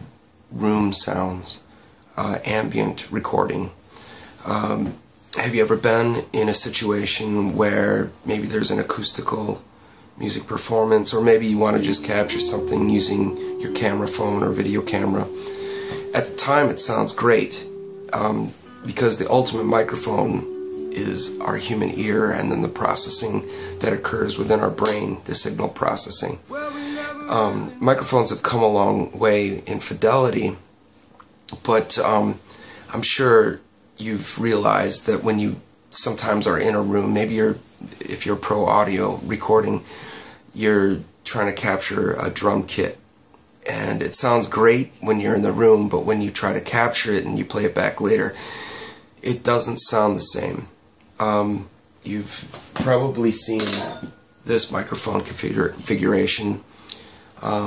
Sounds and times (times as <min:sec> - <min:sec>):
Speech: 0:00.0 - 0:03.8, 0:04.4 - 0:30.6, 0:31.5 - 0:39.9, 0:40.5 - 0:43.0, 0:43.6 - 0:48.4, 0:49.2 - 0:57.6
Music: 0:11.5 - 0:25.2, 0:26.5 - 0:28.5.